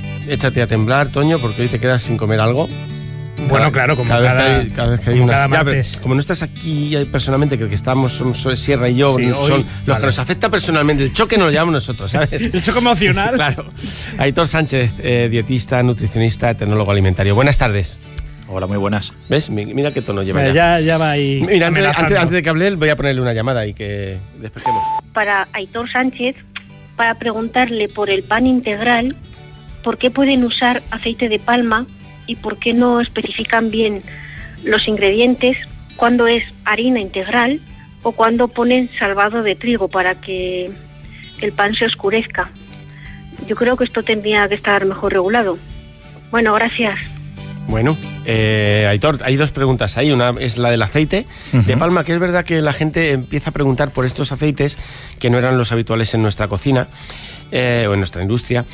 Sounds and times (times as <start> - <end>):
Music: 0.0 - 58.7
Speech: 3.4 - 26.2, 47.7 - 56.9, 57.5 - 58.6
Radio: 24.6 - 25.0.